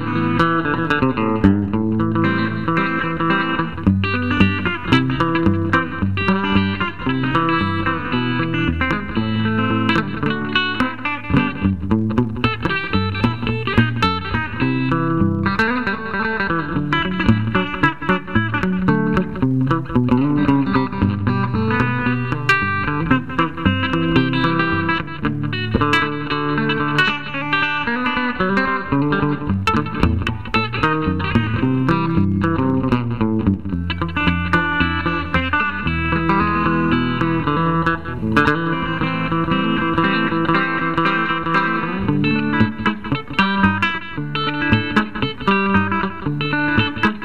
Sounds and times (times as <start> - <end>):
Guitar: 0.0 - 47.2
Inside, small room: 0.0 - 47.2.